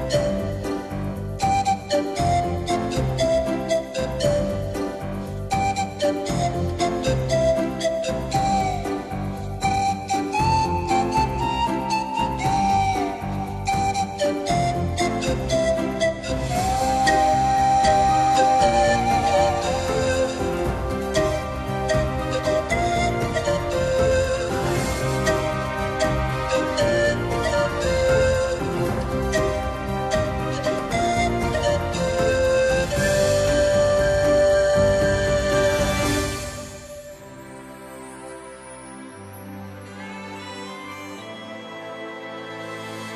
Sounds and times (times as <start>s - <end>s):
Background music: 0.0s - 43.1s
Flute: 0.0s - 43.1s.